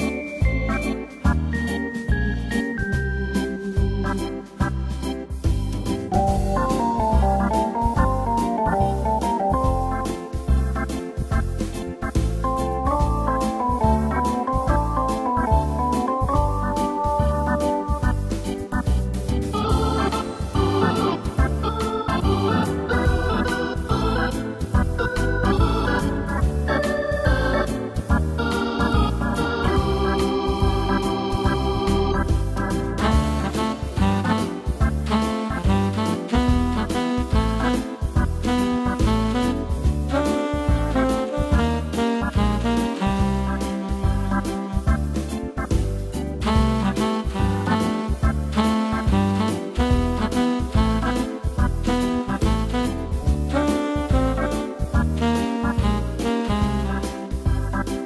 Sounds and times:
Music: 0.0s - 58.0s.

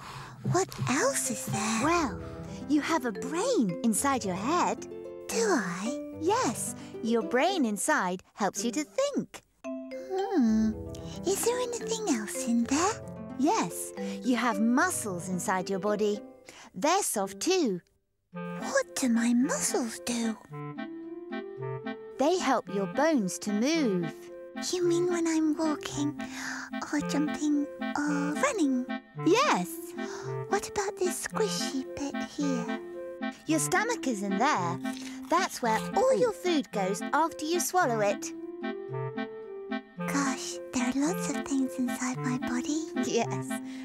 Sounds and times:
Music: 0.0s - 9.0s, 9.6s - 17.8s, 18.4s - 43.8s
Child speech, kid speaking: 0.5s - 9.4s, 10.1s - 16.2s, 16.8s - 17.8s, 18.6s - 20.4s, 22.2s - 32.8s, 33.5s - 38.3s, 40.1s - 43.6s.

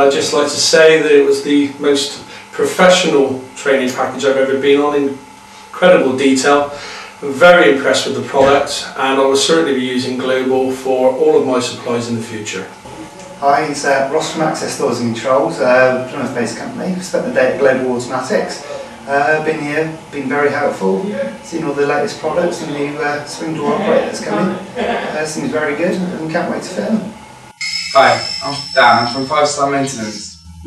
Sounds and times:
Speech: 0.0s - 27.2s, 28.0s - 30.6s.

